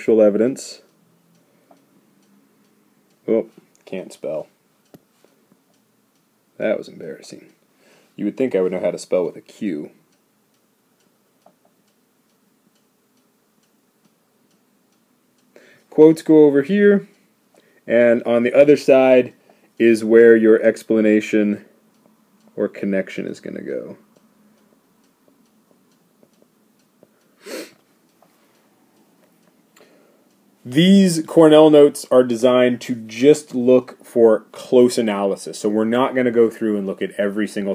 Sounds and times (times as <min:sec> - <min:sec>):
Speech: 0:00.0 - 0:00.9, 0:03.2 - 0:04.5, 0:06.6 - 0:07.6, 0:08.2 - 0:10.0, 0:15.9 - 0:17.1, 0:17.9 - 0:21.7, 0:22.6 - 0:24.0, 0:30.6 - 0:37.7.